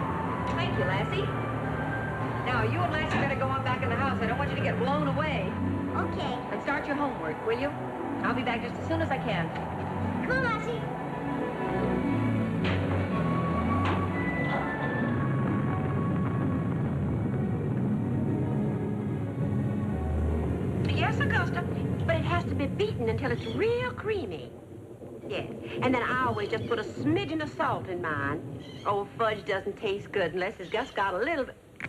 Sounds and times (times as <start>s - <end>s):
Music: 0.0s - 31.4s
Television: 0.0s - 31.8s.